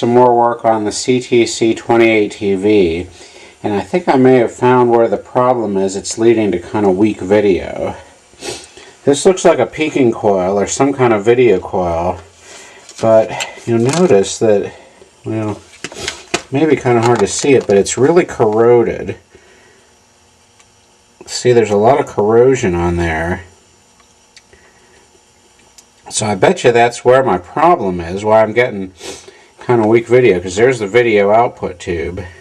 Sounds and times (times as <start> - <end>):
Speech: 0.0 - 8.2, 9.0 - 12.3, 13.0 - 15.7, 16.5 - 19.3, 21.2 - 23.6, 26.0 - 29.0, 29.6 - 32.4.